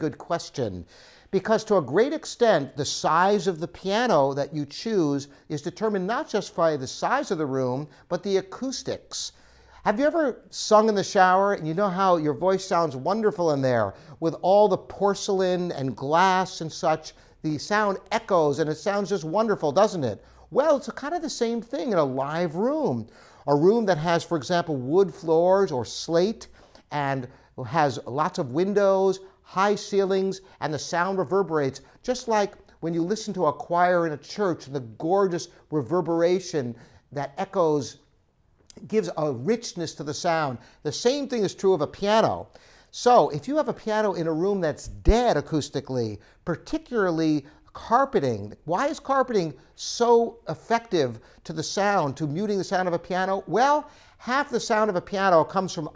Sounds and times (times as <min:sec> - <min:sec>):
Speech: 0:00.0 - 0:38.1, 0:38.7 - 0:55.9.